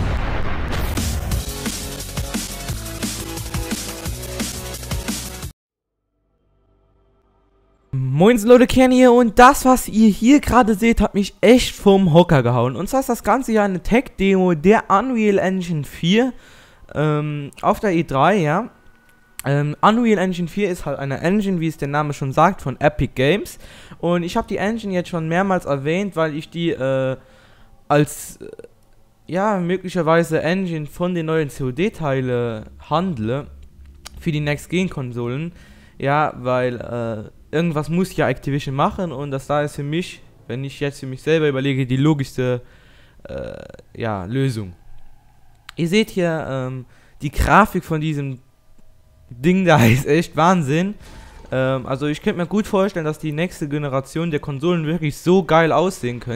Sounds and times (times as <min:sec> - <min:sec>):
Speech: 0:08.0 - 0:18.7, 0:19.4 - 0:27.2, 0:27.9 - 0:28.7, 0:29.3 - 0:42.6, 0:43.3 - 0:44.8, 0:45.7 - 0:48.4, 0:49.4 - 0:51.0, 0:51.6 - 0:56.3.